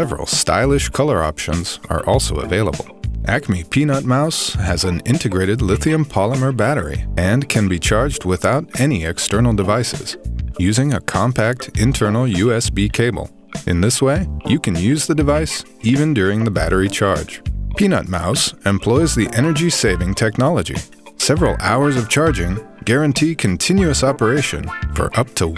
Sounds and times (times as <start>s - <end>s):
Music: 0.0s - 25.5s
Speech: 0.0s - 25.5s.